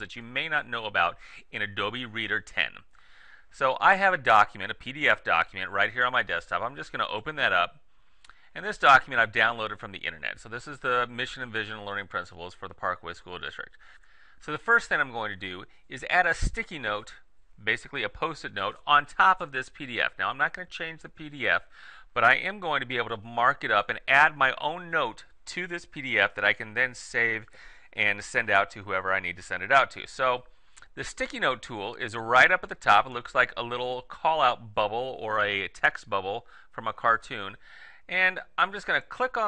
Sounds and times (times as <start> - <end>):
Speech: 0.0 - 2.9, 3.5 - 7.8, 8.6 - 13.8, 14.4 - 39.4.